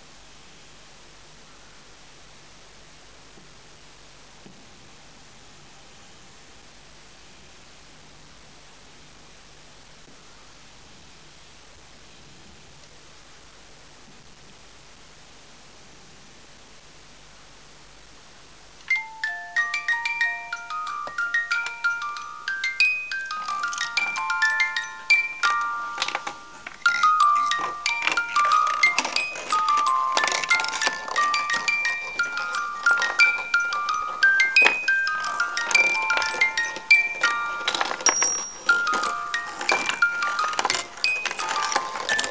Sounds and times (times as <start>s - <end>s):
Music: 18.9s - 42.3s.